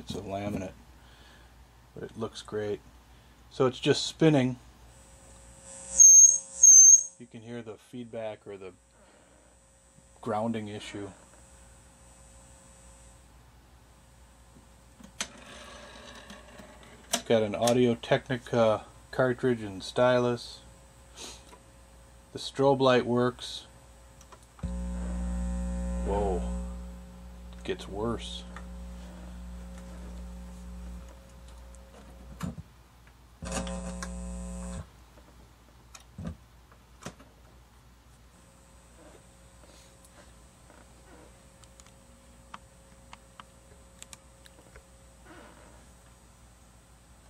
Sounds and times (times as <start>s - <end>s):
Speech: 0.0s - 0.8s, 2.0s - 2.8s, 3.5s - 4.6s, 7.2s - 8.8s, 10.2s - 11.2s, 17.2s - 20.7s, 22.3s - 23.7s, 26.0s - 26.5s, 27.6s - 28.5s.